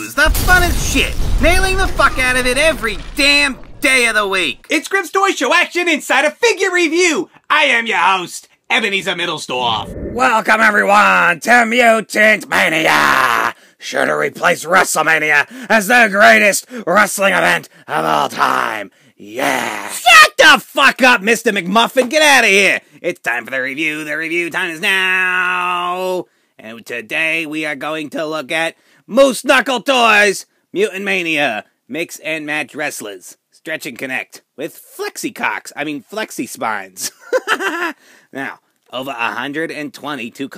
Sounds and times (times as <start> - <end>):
Speech: 0.0 - 37.2, 38.3 - 40.5.